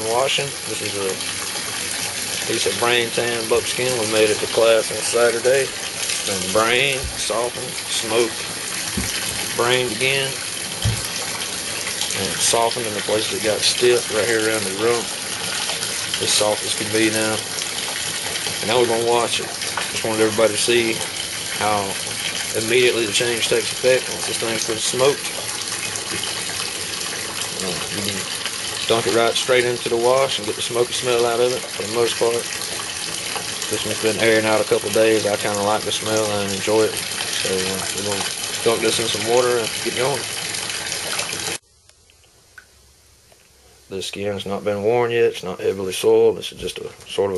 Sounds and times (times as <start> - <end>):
Bathtub (filling or washing): 0.0 - 41.6, 44.1 - 47.3
Water tap, faucet: 0.0 - 41.6
Water: 0.0 - 47.3.